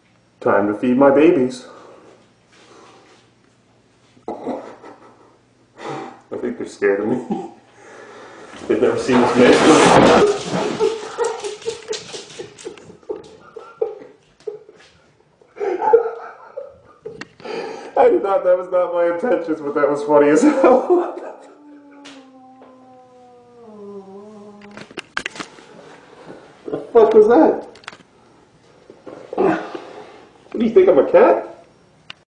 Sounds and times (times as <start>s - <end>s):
Speech: 0.4s - 1.8s, 6.3s - 7.4s, 8.7s - 10.3s, 18.0s - 21.0s, 30.6s - 31.6s.